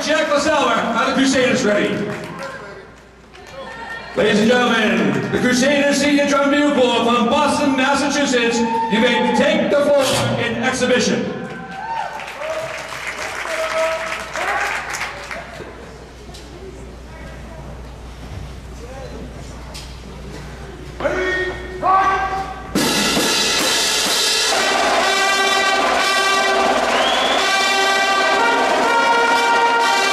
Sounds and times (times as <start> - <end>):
Speech: 0.0 - 11.4, 18.8 - 22.6.